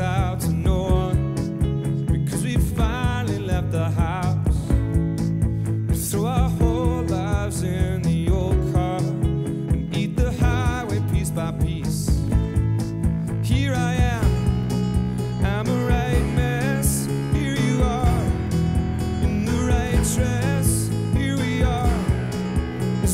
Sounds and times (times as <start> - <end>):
Music: 0.0 - 23.1.